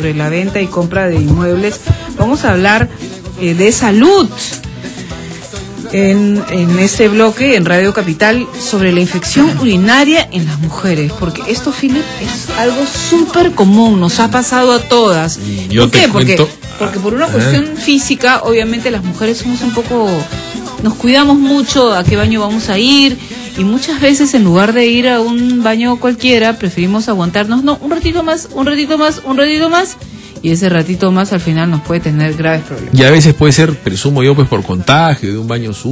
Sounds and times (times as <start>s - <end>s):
Music: 0.0s - 35.9s.